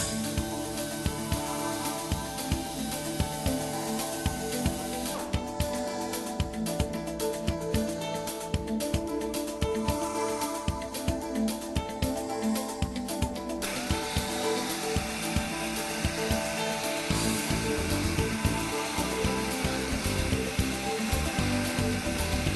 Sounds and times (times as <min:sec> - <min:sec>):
Music: 0:00.0 - 0:22.5.